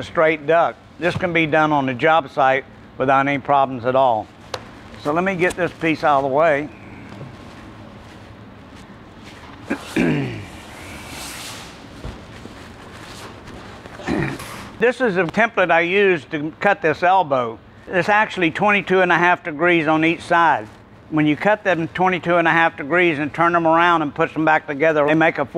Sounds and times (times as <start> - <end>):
Speech: 0.0 - 4.3, 5.0 - 6.7, 14.8 - 25.5.